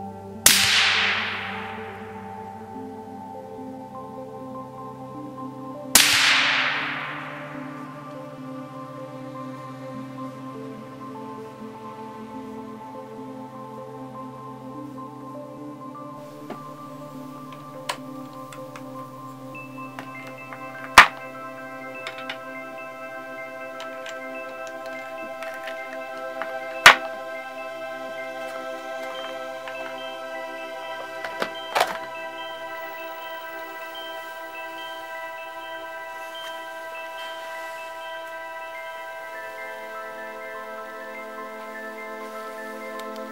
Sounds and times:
Glockenspiel: 0.0s - 43.3s
Marimba, xylophone: 0.0s - 43.3s.

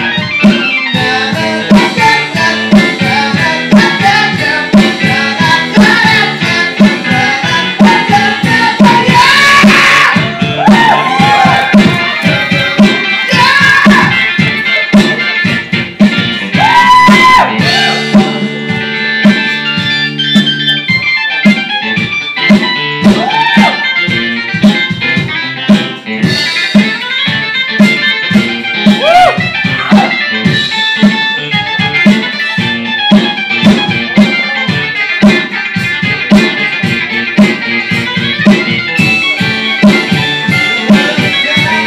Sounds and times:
Guitar: 0.0s - 41.8s.

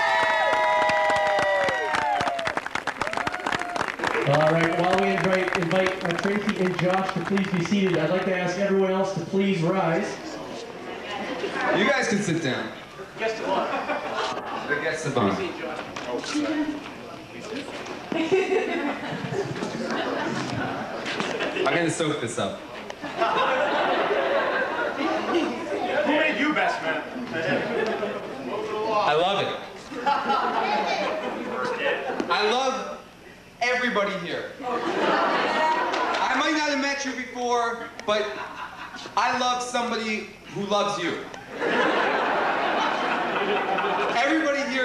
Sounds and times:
Male speech, man speaking: 4.3s - 10.6s, 11.6s - 13.7s, 14.7s - 17.7s, 21.6s - 22.7s, 25.8s - 29.7s, 31.4s - 33.0s, 33.6s - 34.6s, 36.2s - 38.4s, 39.2s - 41.3s, 44.1s - 44.8s.

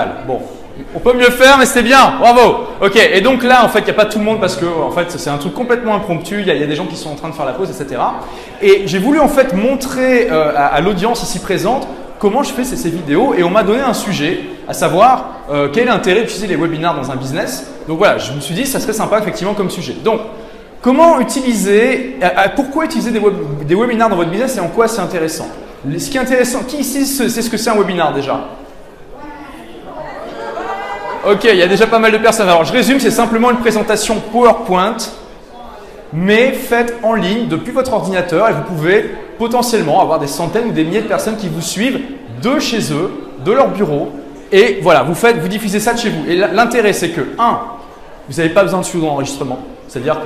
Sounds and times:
Speech: 0.0s - 28.5s, 29.3s - 50.2s.

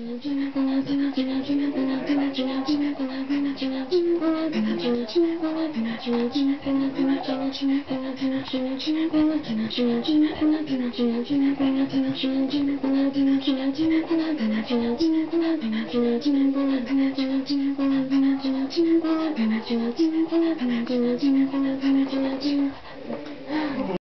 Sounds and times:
Female singing: 0.0s - 24.0s.

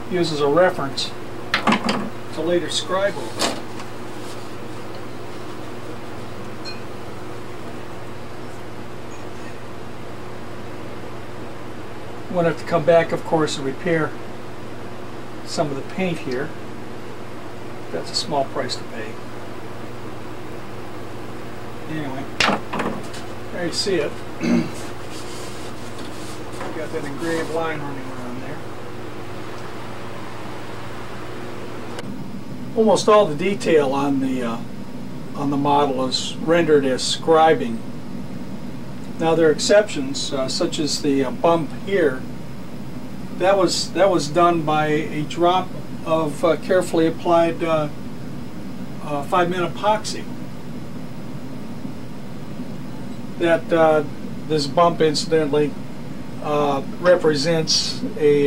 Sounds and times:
Speech: 0.1s - 1.2s, 2.3s - 3.5s, 12.3s - 14.2s, 15.4s - 16.6s, 17.9s - 19.2s, 21.9s - 22.4s, 23.5s - 24.2s, 26.6s - 28.7s, 32.8s - 34.7s, 35.4s - 37.8s, 39.2s - 42.3s, 43.4s - 48.0s, 49.0s - 50.3s, 53.4s - 55.8s, 56.4s - 58.4s.

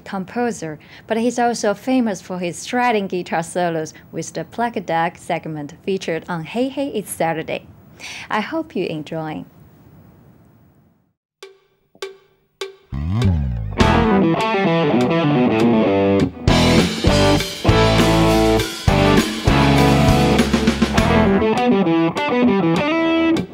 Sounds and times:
Guitar: 13.0s - 23.5s.

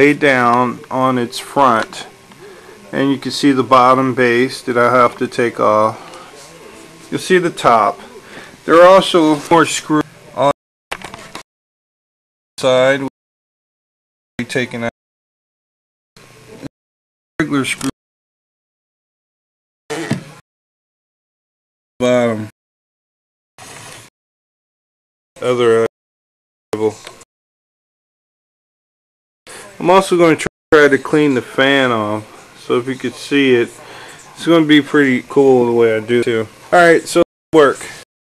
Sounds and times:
Speech: 0.0s - 10.6s, 12.6s - 13.1s, 14.4s - 14.9s, 17.4s - 18.0s, 22.0s - 22.5s, 25.4s - 25.9s, 26.8s - 27.0s, 29.5s - 38.0s.

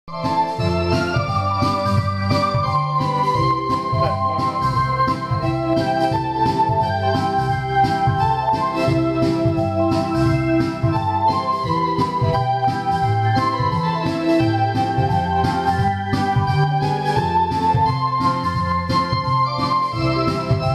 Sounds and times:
Electronic organ: 0.1s - 20.7s.

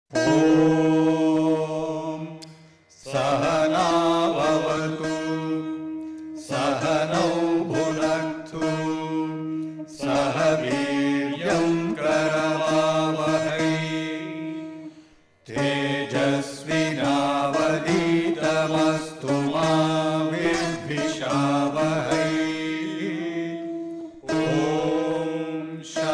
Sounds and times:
Mantra: 0.2s - 5.8s, 6.4s - 14.9s, 15.5s - 26.1s.

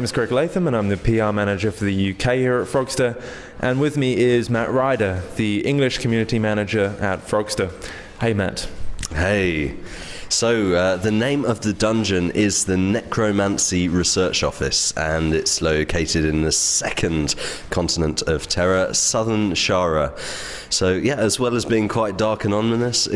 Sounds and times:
Speech: 0.0s - 23.1s.

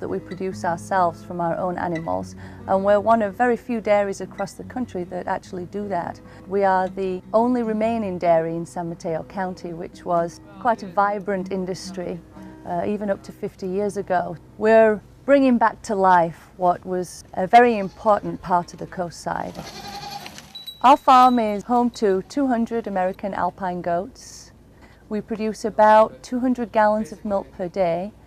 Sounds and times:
Music: 0.0s - 15.6s
Speech: 0.0s - 19.7s, 20.8s - 24.5s, 25.1s - 28.2s
Bleat: 17.6s - 18.4s, 19.6s - 20.5s.

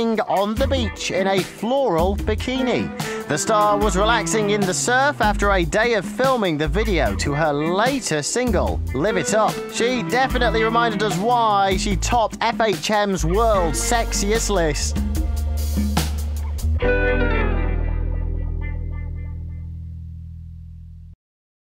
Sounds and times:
Speech: 0.0s - 15.0s
Music: 0.0s - 21.2s.

